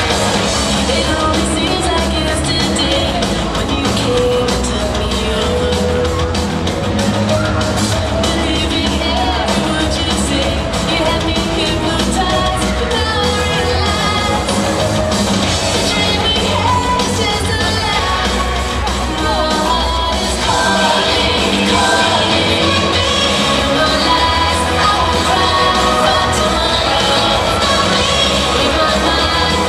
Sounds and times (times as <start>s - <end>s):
Rock and roll: 0.0s - 29.6s.